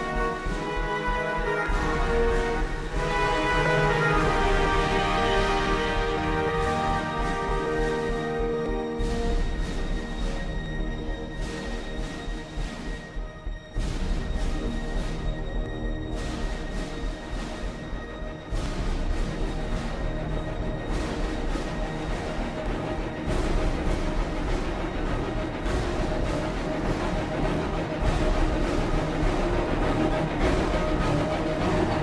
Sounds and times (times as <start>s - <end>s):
Music: 0.0s - 32.0s.